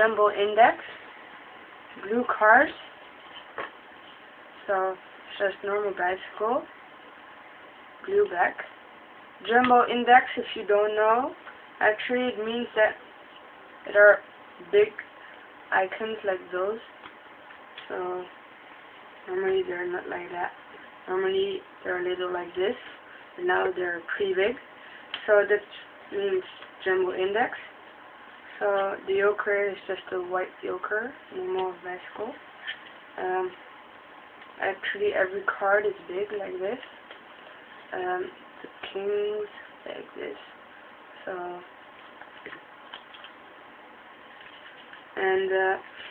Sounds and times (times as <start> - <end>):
Speech: 0.0 - 1.0, 2.0 - 2.9, 4.6 - 6.7, 8.0 - 8.7, 9.4 - 13.0, 13.9 - 15.1, 15.7 - 17.0, 17.8 - 18.4, 19.2 - 24.6, 25.2 - 27.7, 28.6 - 32.4, 33.2 - 33.6, 34.6 - 36.9, 37.9 - 40.6, 41.2 - 41.7, 45.2 - 46.1.